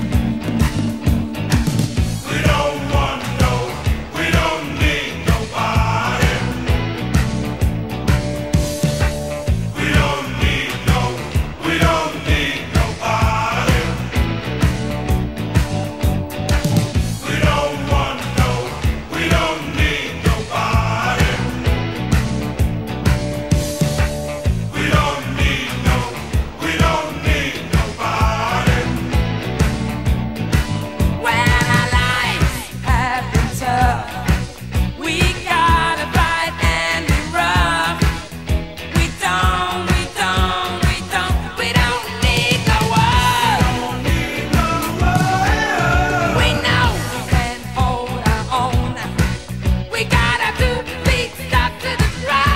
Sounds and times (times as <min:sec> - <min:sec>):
Music: 0:00.0 - 0:52.5.